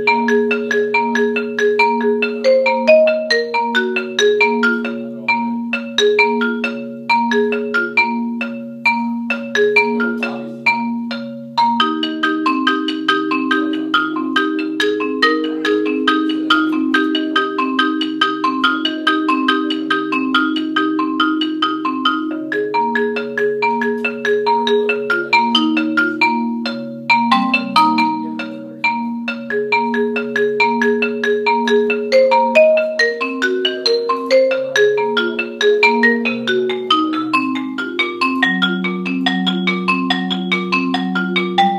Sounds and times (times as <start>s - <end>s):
Marimba, xylophone: 0.0s - 41.7s.